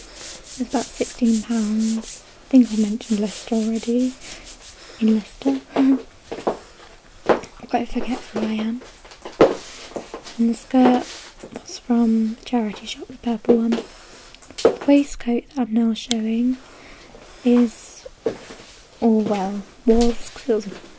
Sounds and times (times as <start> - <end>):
Narration, monologue: 0.0 - 20.9.